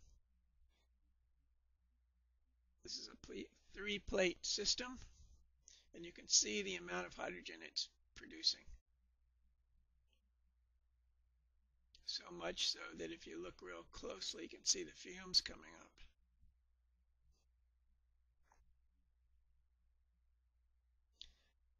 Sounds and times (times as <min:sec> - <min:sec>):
Speech: 0:02.9 - 0:05.1, 0:06.0 - 0:08.8, 0:12.0 - 0:16.1.